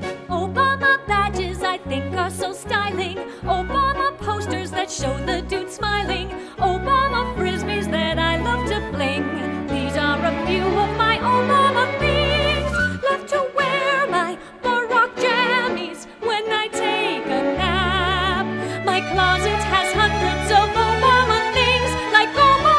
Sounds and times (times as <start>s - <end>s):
Christmas music: 0.0s - 22.7s.